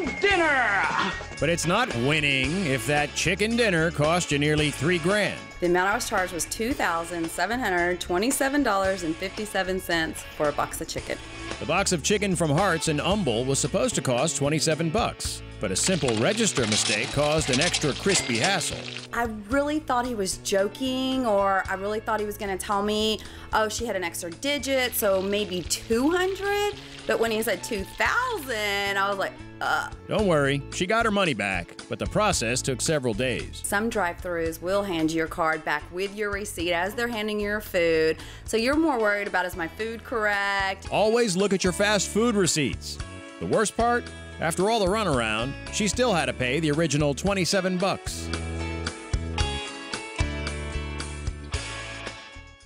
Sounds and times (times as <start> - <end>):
Music: 0.0 - 52.6
Speech: 0.3 - 10.9, 11.6 - 48.3.